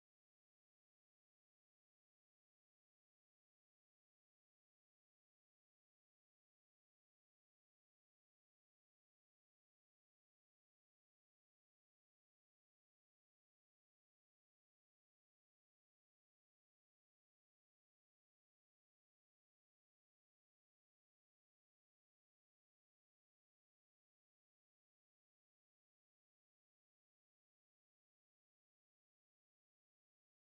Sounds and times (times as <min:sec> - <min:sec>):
Music: 0:00.0 - 0:30.5.